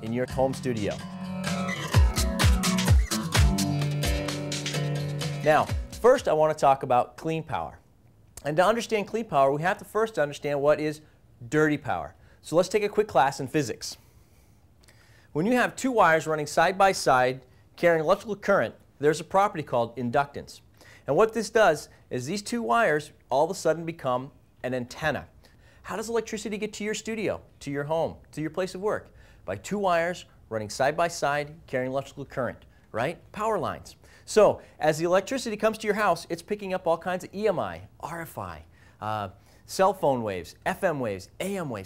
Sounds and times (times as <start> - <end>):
Speech: 0.0 - 1.0, 5.4 - 7.8, 8.4 - 14.0, 15.4 - 41.8.